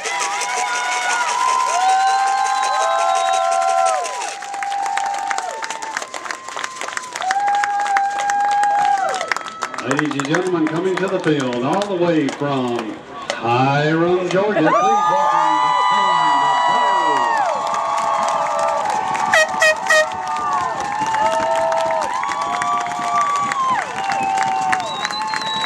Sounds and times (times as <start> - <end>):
Cheering: 0.0 - 10.8, 14.3 - 25.6
Speech: 9.8 - 17.3.